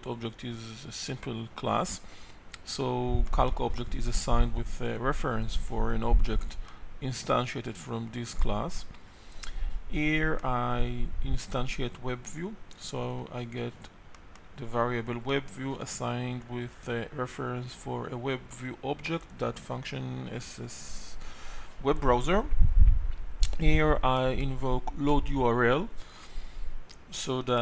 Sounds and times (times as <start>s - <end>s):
Speech: 0.0s - 2.0s, 2.6s - 8.9s, 9.9s - 13.9s, 14.6s - 21.2s, 21.8s - 22.6s, 23.5s - 26.0s, 27.1s - 27.6s.